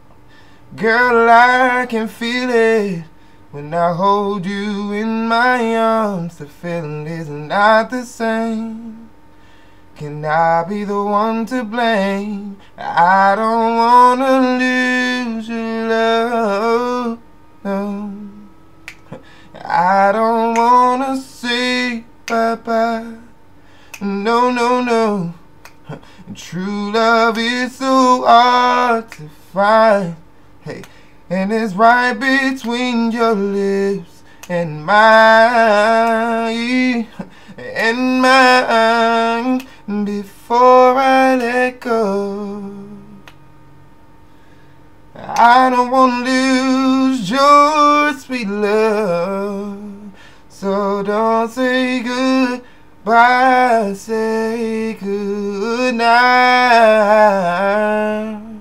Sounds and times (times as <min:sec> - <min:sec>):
Male singing: 0:00.7 - 0:09.1, 0:10.0 - 0:18.5, 0:19.1 - 0:23.4, 0:24.0 - 0:43.3, 0:45.2 - 0:58.6.